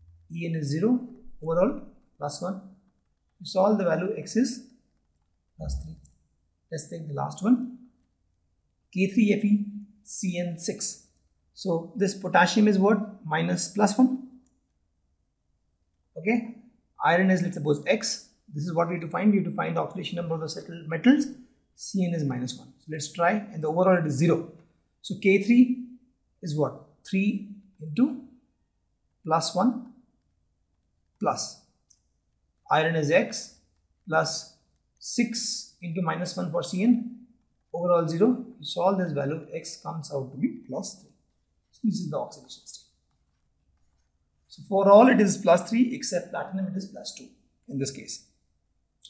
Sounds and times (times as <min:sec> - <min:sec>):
Speech: 0:00.3 - 0:02.6, 0:03.4 - 0:04.6, 0:05.6 - 0:06.0, 0:06.8 - 0:07.7, 0:09.0 - 0:11.0, 0:11.6 - 0:14.1, 0:16.2 - 0:16.4, 0:17.0 - 0:24.5, 0:25.1 - 0:25.8, 0:26.4 - 0:28.2, 0:29.3 - 0:29.8, 0:31.2 - 0:31.6, 0:32.7 - 0:37.1, 0:37.8 - 0:41.0, 0:41.8 - 0:42.8, 0:44.5 - 0:48.2.